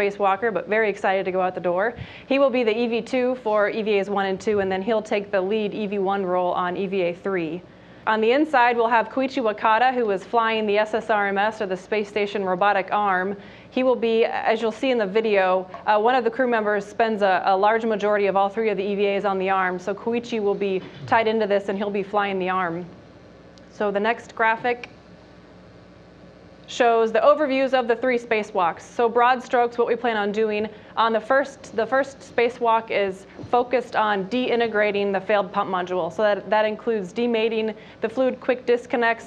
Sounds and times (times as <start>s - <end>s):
Speech: 0.0s - 23.0s, 23.7s - 25.0s, 26.7s - 39.2s.